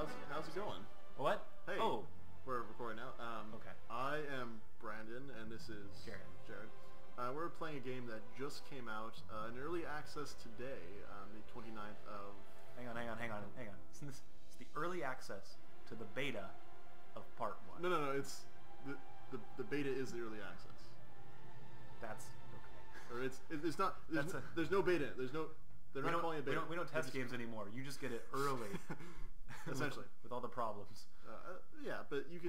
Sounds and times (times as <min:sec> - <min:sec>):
Speech: 0:00.0 - 0:16.5, 0:17.2 - 0:20.9, 0:22.0 - 0:22.4, 0:23.1 - 0:28.8, 0:29.7 - 0:32.4.